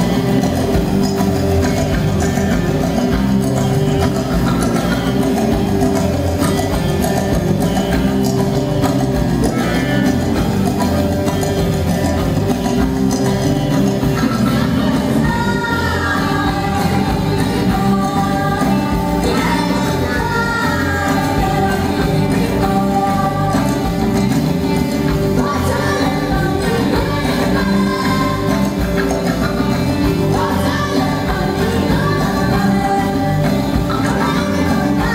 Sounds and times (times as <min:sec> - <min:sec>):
Music: 0:00.0 - 0:35.1.